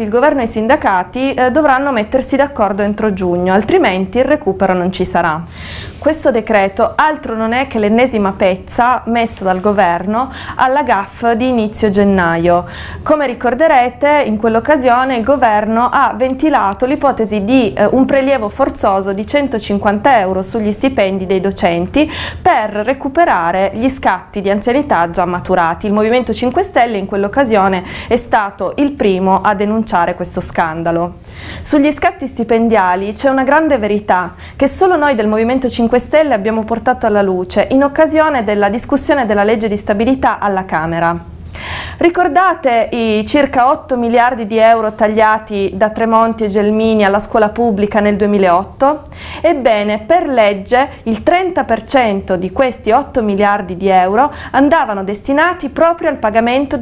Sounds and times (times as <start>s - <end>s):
Speech: 0.0s - 41.3s, 42.0s - 56.8s.